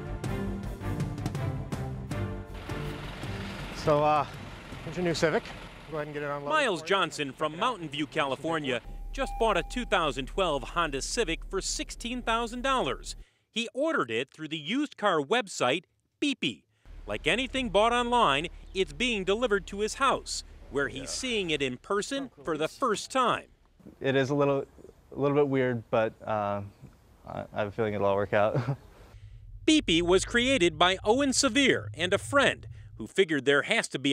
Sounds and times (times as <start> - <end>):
Speech: 4.9 - 28.7, 29.7 - 34.1.